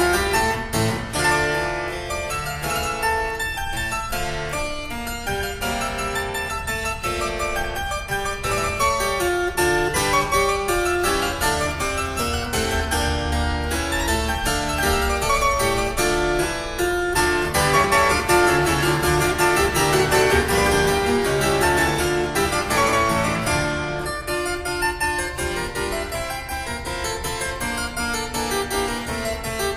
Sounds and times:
Harpsichord: 0:00.0 - 0:29.7.

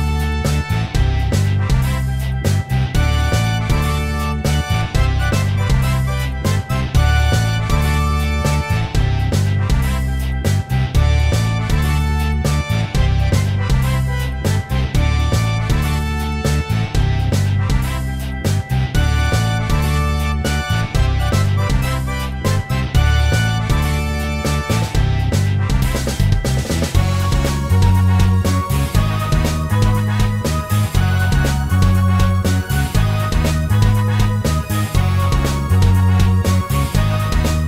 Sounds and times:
Music: 0:00.0 - 0:37.6.

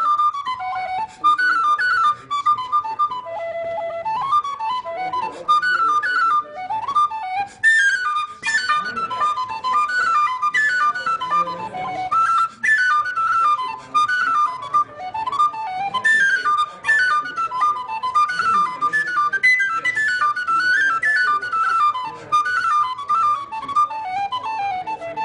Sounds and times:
Inside, large room or hall: 0:00.0 - 0:25.2
Music: 0:00.0 - 0:25.2
Speech: 0:01.0 - 0:07.0, 0:08.3 - 0:25.2.

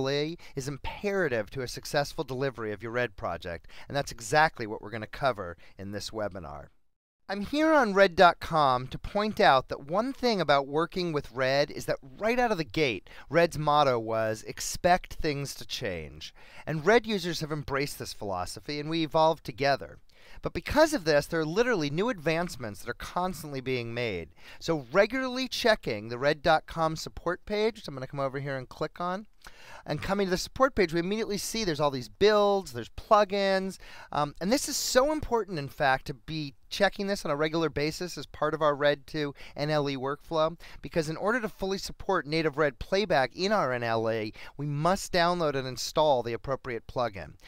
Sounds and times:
Speech: 0:00.0 - 0:47.4.

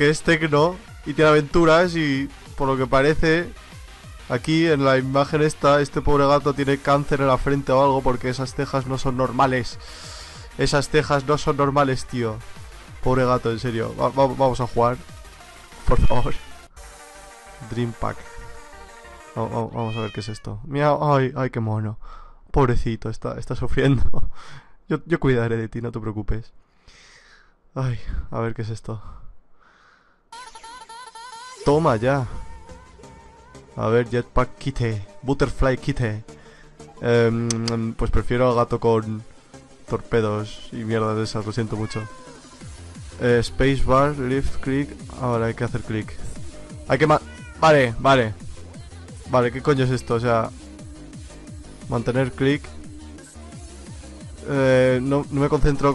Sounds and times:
Speech: 0:00.0 - 0:03.6, 0:04.3 - 0:09.8, 0:10.6 - 0:12.4, 0:13.0 - 0:15.0, 0:15.9 - 0:16.4, 0:17.6 - 0:18.4, 0:19.4 - 0:24.2, 0:24.9 - 0:26.5, 0:27.8 - 0:29.2, 0:31.6 - 0:32.4, 0:33.8 - 0:36.2, 0:37.0 - 0:39.3, 0:39.9 - 0:42.2, 0:43.2 - 0:48.4, 0:49.3 - 0:50.5, 0:51.9 - 0:52.8, 0:54.4 - 0:55.9
Techno: 0:00.0 - 0:19.8, 0:30.4 - 0:35.6, 0:38.4 - 0:55.9.

